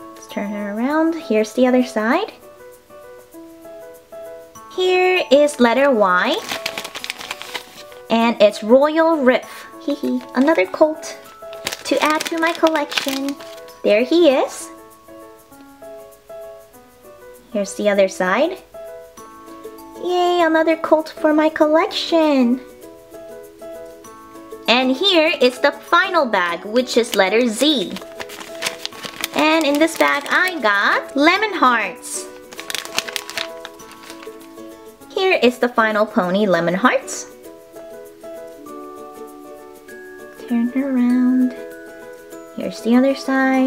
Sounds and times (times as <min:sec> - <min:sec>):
Music: 0:00.0 - 0:43.6
Speech: 0:00.2 - 0:02.4, 0:04.8 - 0:06.4, 0:08.1 - 0:11.2, 0:11.8 - 0:14.8, 0:17.5 - 0:18.6, 0:20.0 - 0:22.7, 0:24.7 - 0:28.0, 0:29.4 - 0:32.3, 0:35.1 - 0:37.3, 0:40.4 - 0:41.6, 0:42.6 - 0:43.6.